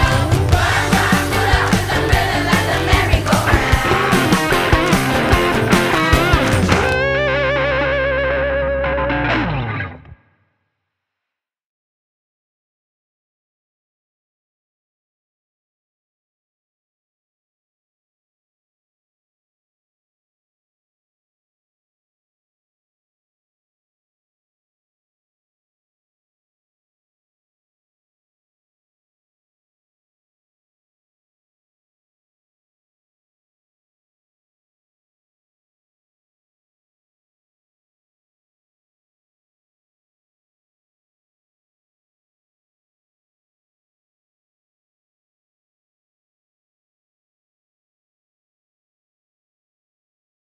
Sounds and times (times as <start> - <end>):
Choir: 0.0 - 6.9.